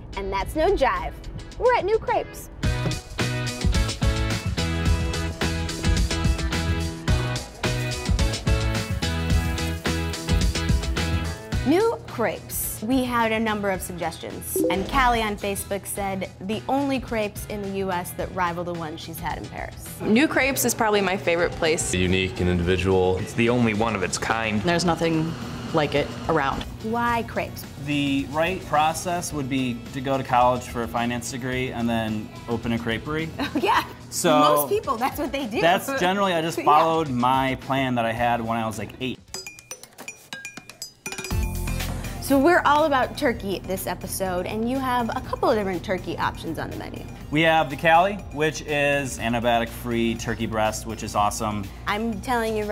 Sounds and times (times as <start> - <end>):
Music: 0.0 - 52.7.